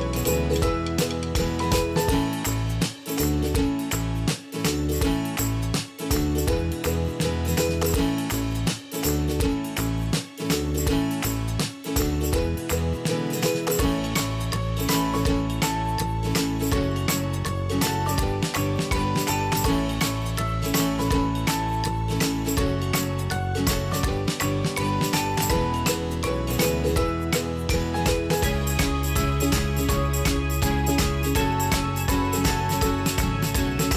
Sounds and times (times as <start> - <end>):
Music: 0.0 - 33.9.